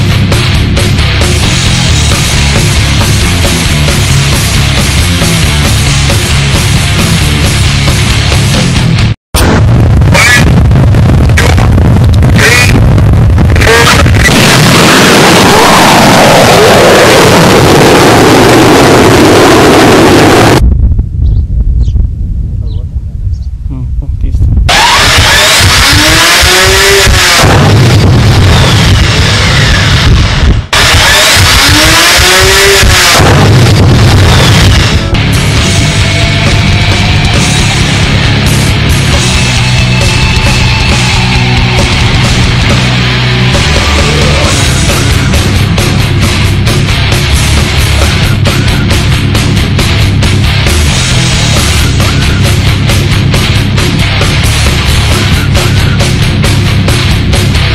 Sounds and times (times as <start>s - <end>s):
Music: 0.0s - 20.6s, 24.7s - 57.7s
Outside, rural or natural: 0.0s - 57.7s.